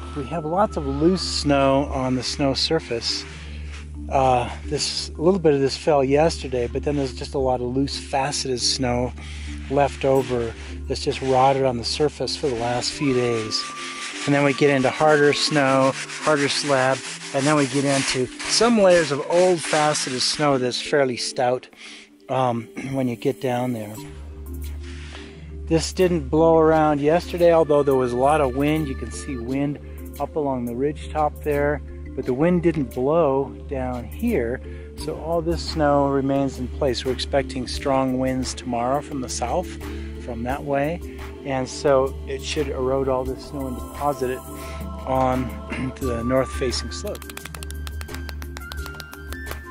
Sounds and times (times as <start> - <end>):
Music: 0.0 - 49.7
Speech: 0.2 - 3.2, 4.1 - 21.7, 22.3 - 24.0, 25.7 - 44.5, 45.1 - 47.2.